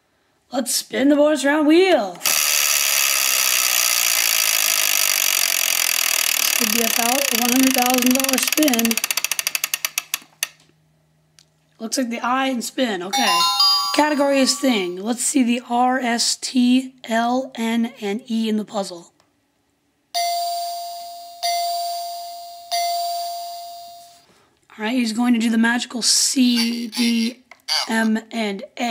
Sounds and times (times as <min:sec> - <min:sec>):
Chainsaw: 0:02.2 - 0:09.4.